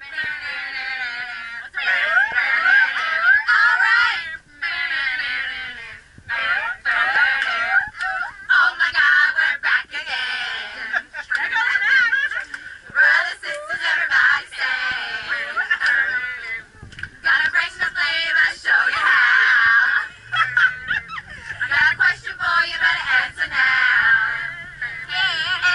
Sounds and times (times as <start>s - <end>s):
Female singing: 13.0s - 19.9s, 21.7s - 25.7s.